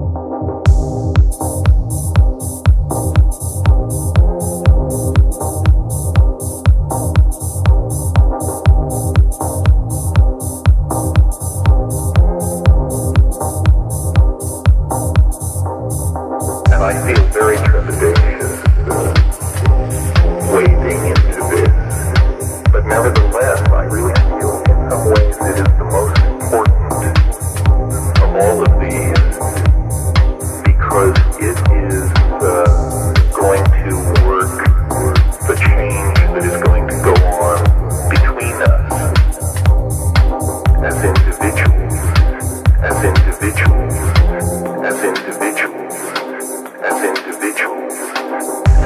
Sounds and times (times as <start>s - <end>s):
Music: 0.0s - 48.8s.